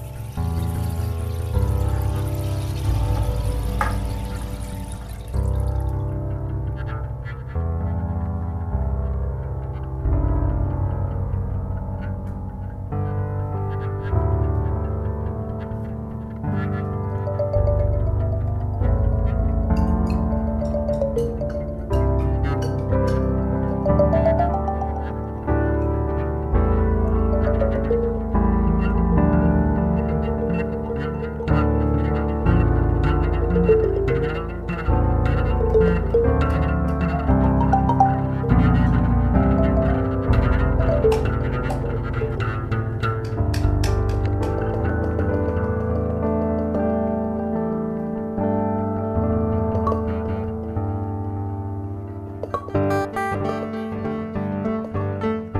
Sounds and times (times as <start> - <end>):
Ambient music: 0.0 - 55.6.